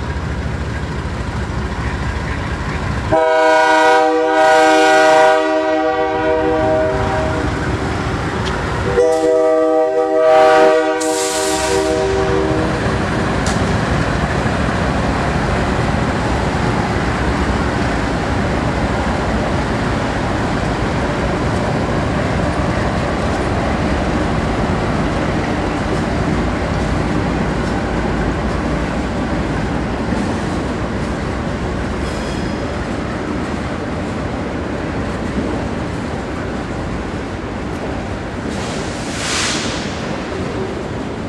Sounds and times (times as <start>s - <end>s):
Train horn: 3.1s - 7.6s, 8.8s - 12.9s
Train whistle: 3.1s - 7.6s, 8.9s - 12.9s.